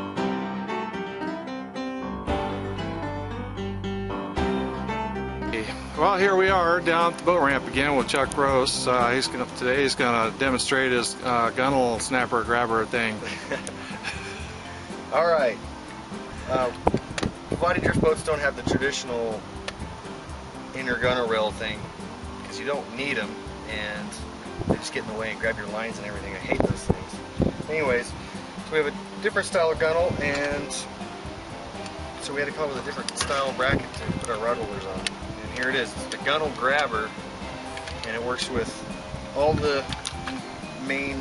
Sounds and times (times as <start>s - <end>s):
Music: 0.0s - 41.2s
Speech: 17.6s - 19.4s, 22.5s - 24.2s, 24.8s - 28.1s, 28.7s - 30.9s, 39.4s - 39.8s.